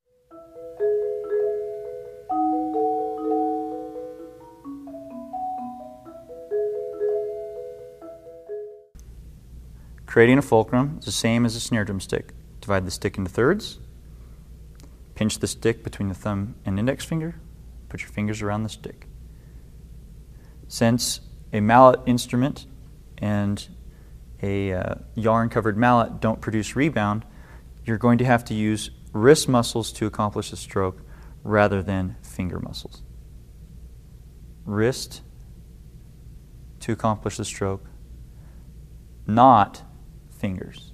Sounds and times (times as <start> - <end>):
Marimba, xylophone: 0.3 - 8.9
Speech: 10.1 - 13.9, 15.2 - 19.1, 20.7 - 23.8, 24.4 - 33.1, 34.6 - 35.3, 36.8 - 37.9, 39.3 - 40.9.